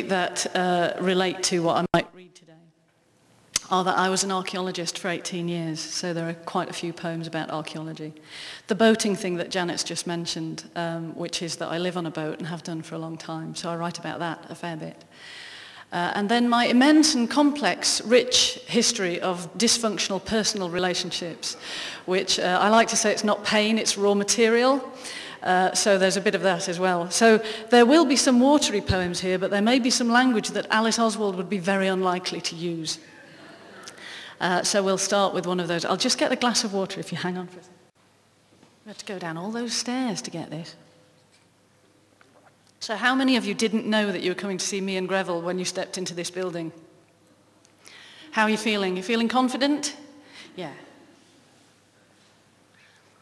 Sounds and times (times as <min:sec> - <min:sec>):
Speech: 0:00.0 - 0:02.7, 0:03.6 - 0:15.0, 0:15.9 - 0:33.1, 0:34.4 - 0:37.7, 0:38.8 - 0:40.8, 0:42.8 - 0:46.8, 0:48.4 - 0:50.9.